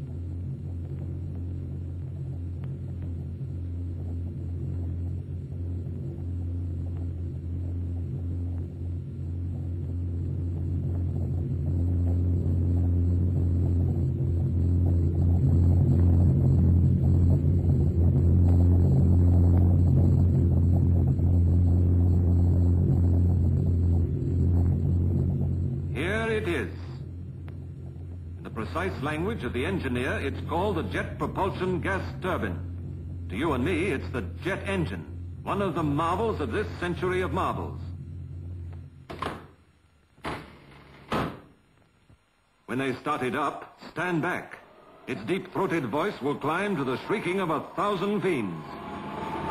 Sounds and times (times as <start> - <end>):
Music: 0.0 - 39.0
Rumble: 0.0 - 42.7, 43.9 - 49.5.